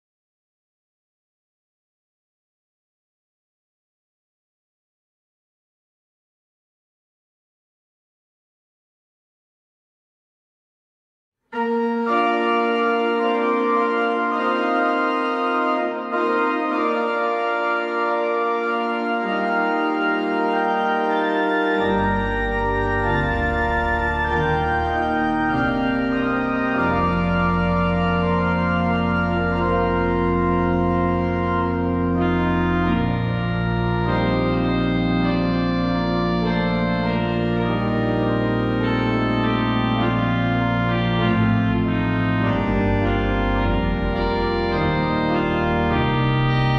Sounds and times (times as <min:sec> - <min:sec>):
Background music: 0:11.6 - 0:46.7.